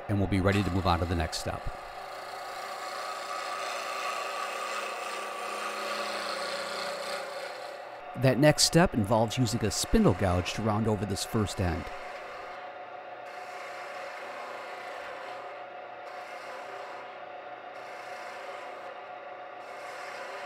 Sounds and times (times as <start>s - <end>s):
Speech: 0.0s - 1.8s, 8.2s - 11.9s
Wood: 0.0s - 7.8s, 9.5s - 12.6s, 13.3s - 17.2s, 17.8s - 19.0s, 19.6s - 20.4s.